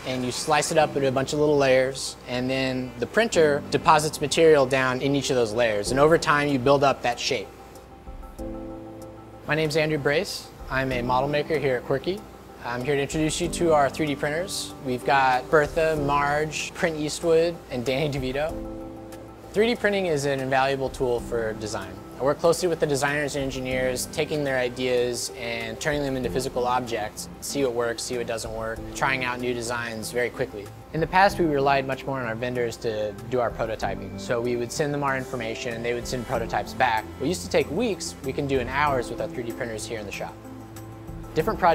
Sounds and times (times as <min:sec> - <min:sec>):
Speech: 0:00.0 - 0:07.5, 0:09.5 - 0:18.6, 0:19.6 - 0:40.4, 0:41.4 - 0:41.7
Music: 0:00.0 - 0:41.7.